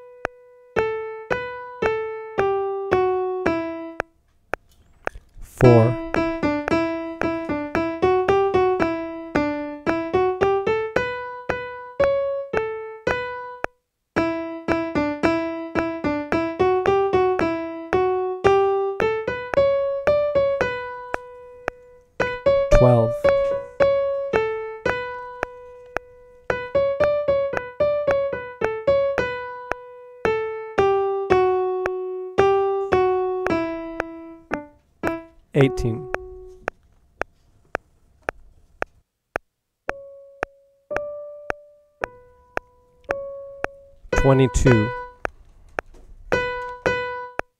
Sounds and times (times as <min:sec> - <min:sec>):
Speech: 0:05.5 - 0:06.1, 0:22.7 - 0:23.2, 0:35.6 - 0:36.1, 0:44.2 - 0:45.0.